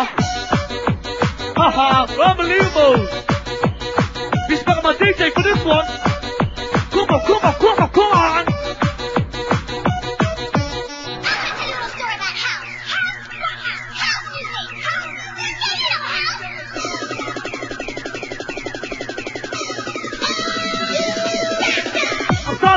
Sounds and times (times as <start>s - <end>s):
Music: 0.0s - 22.7s.